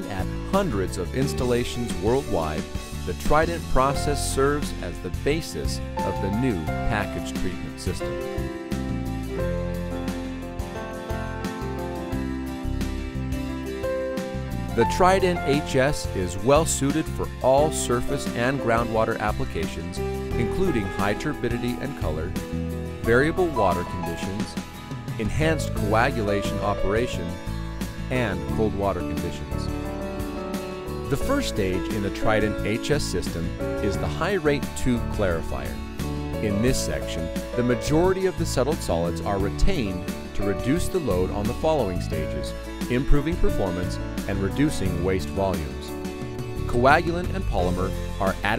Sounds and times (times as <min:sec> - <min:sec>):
Speech: 0:00.0 - 0:08.2, 0:14.8 - 0:22.3, 0:23.0 - 0:24.6, 0:25.2 - 0:27.4, 0:28.1 - 0:29.7, 0:31.1 - 0:35.8, 0:36.4 - 0:45.9, 0:46.7 - 0:48.5
Music: 0:00.0 - 0:48.5.